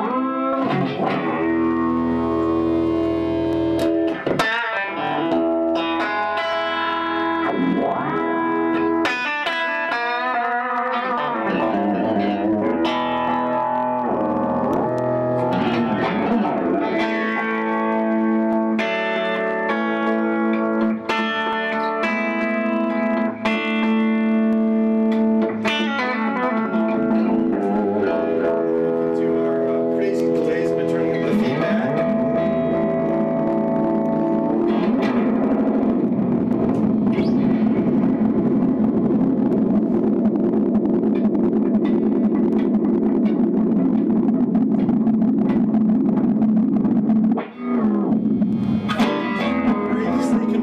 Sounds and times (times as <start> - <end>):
Effects unit: 0.0 - 50.6.